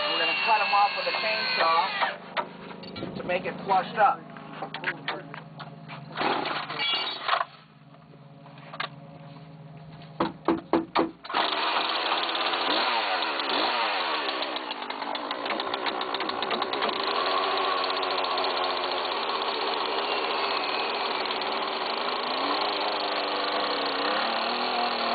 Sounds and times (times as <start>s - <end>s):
Chainsaw: 0.0s - 2.2s, 11.2s - 25.1s
Speech: 3.2s - 5.4s.